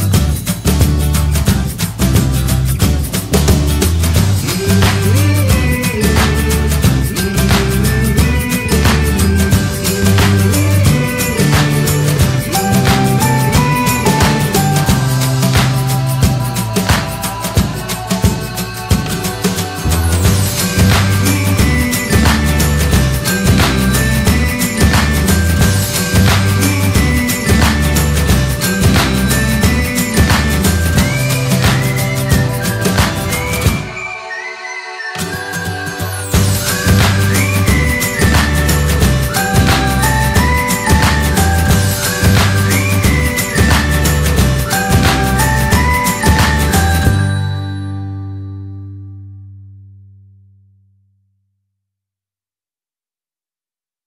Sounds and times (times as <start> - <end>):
Outside, urban or manmade: 0.0 - 49.6
Music: 0.0 - 51.0.